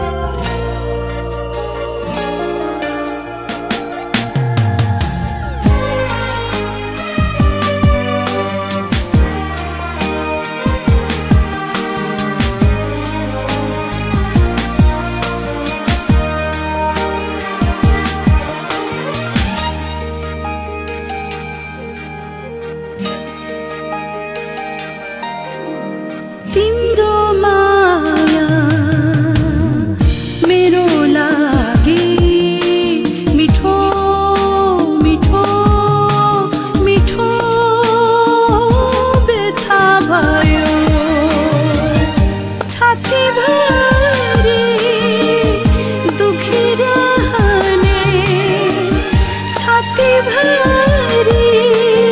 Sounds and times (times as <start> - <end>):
Tender music: 0.0 - 52.1.